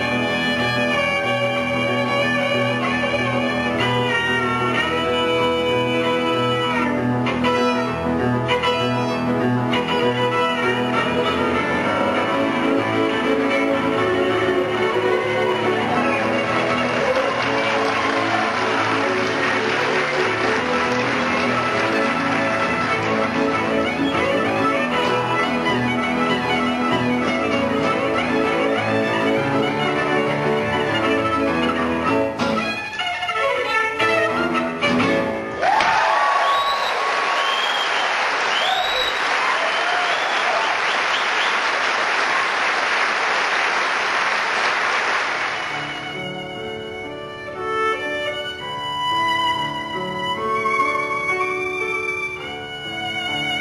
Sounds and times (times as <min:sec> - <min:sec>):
Violin, fiddle: 0:00.0 - 0:35.6, 0:45.6 - 0:53.6.